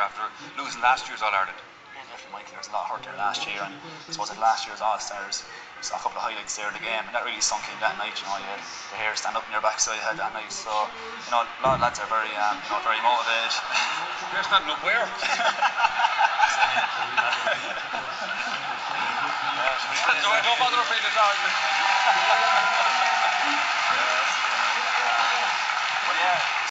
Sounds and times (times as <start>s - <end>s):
Male speech, man speaking: 0.0s - 15.6s, 16.4s - 21.6s, 23.9s - 26.5s
Conversation: 0.0s - 26.7s.